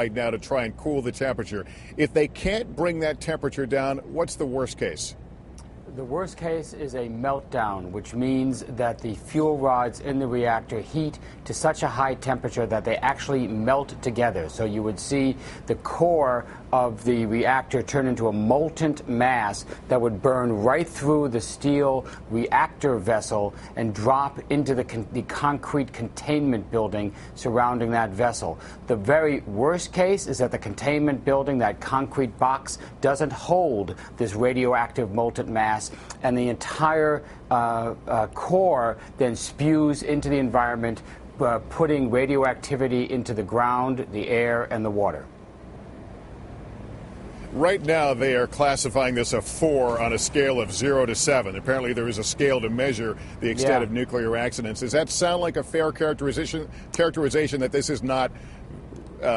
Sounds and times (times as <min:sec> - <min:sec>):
Speech: 0:00.0 - 0:05.2, 0:05.9 - 0:45.3, 0:47.6 - 0:58.3.